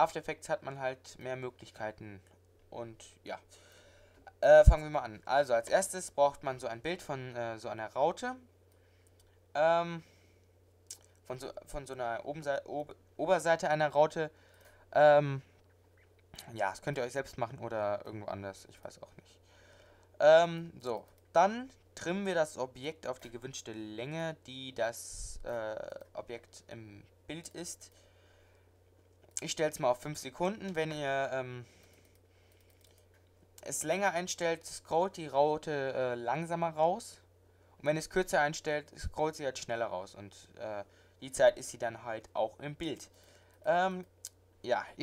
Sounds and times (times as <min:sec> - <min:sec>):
Speech: 0:00.0 - 0:03.5, 0:04.3 - 0:08.5, 0:09.6 - 0:10.1, 0:11.2 - 0:14.4, 0:15.0 - 0:15.5, 0:16.4 - 0:19.4, 0:20.2 - 0:27.9, 0:29.4 - 0:31.7, 0:33.6 - 0:45.0.